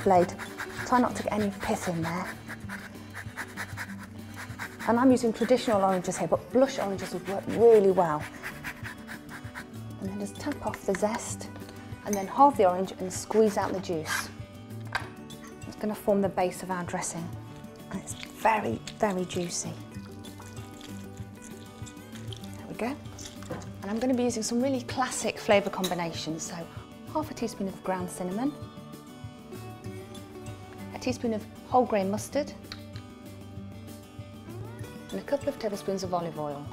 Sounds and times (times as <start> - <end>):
Speech: 0.0 - 2.3, 4.9 - 8.3, 10.0 - 11.5, 12.1 - 14.3, 15.7 - 17.3, 17.9 - 19.8, 22.6 - 23.0, 23.8 - 28.6, 30.9 - 32.6, 35.1 - 36.7
Music: 0.0 - 36.7.